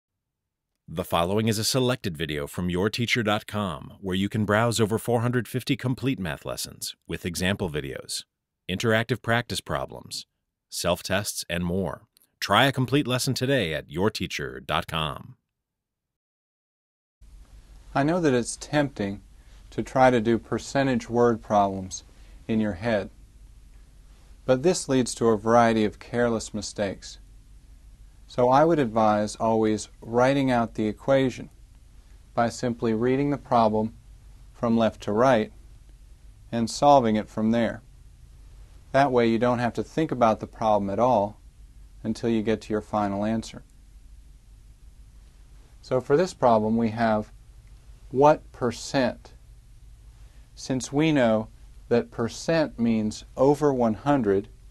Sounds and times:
Speech: 0:00.9 - 0:15.4, 0:18.0 - 0:23.1, 0:24.5 - 0:27.2, 0:28.3 - 0:31.5, 0:32.4 - 0:34.0, 0:34.6 - 0:35.5, 0:36.5 - 0:37.8, 0:39.0 - 0:41.4, 0:42.0 - 0:43.6, 0:45.8 - 0:47.3, 0:48.2 - 0:49.4, 0:50.6 - 0:54.5.

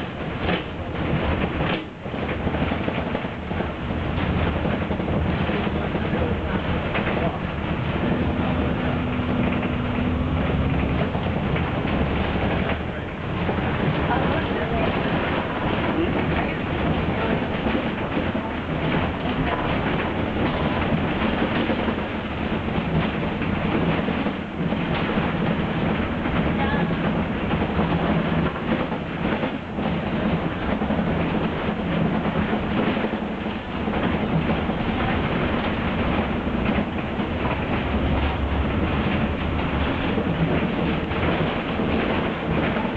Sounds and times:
Bus: 0:00.0 - 0:42.9.

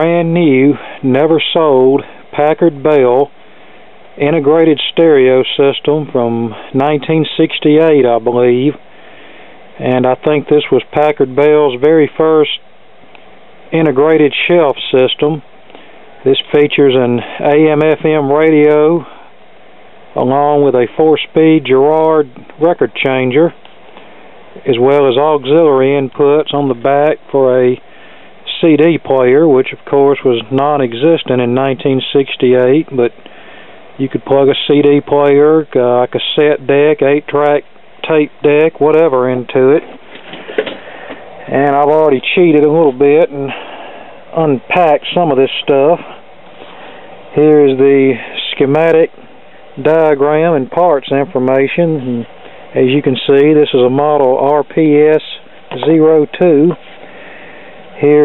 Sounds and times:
Speech: 0:00.0 - 0:03.4, 0:04.2 - 0:08.8, 0:09.8 - 0:12.7, 0:13.7 - 0:15.5, 0:16.2 - 0:19.2, 0:20.2 - 0:23.6, 0:24.6 - 0:27.8, 0:28.5 - 0:33.2, 0:34.0 - 0:39.9, 0:41.5 - 0:43.7, 0:44.3 - 0:46.2, 0:47.3 - 0:49.2, 0:49.8 - 0:56.8, 0:58.0 - 0:58.2.

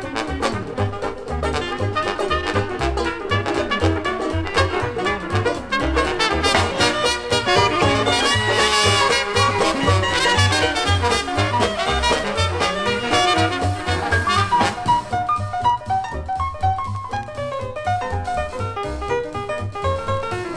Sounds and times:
Blues: 0:00.0 - 0:20.5.

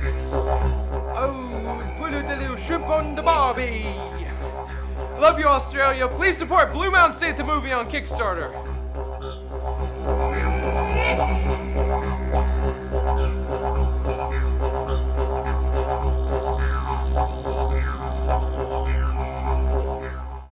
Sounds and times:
Music: 0:00.0 - 0:20.5.

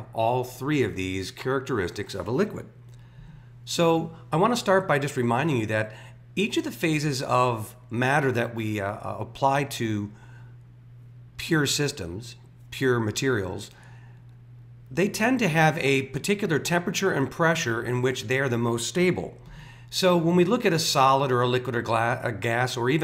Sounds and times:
Speech: 0:00.0 - 0:02.8, 0:03.7 - 0:10.2, 0:11.4 - 0:13.8, 0:14.9 - 0:23.0.

